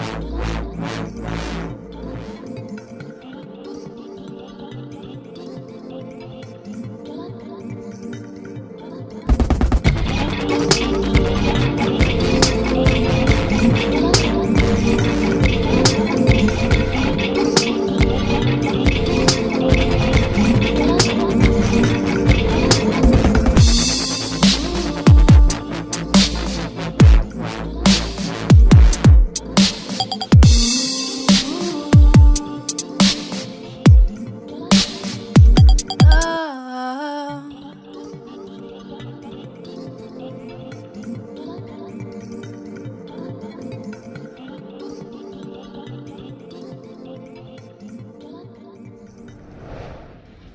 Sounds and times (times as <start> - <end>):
Dubstep: 9.3 - 36.4
Electronica: 9.3 - 38.0.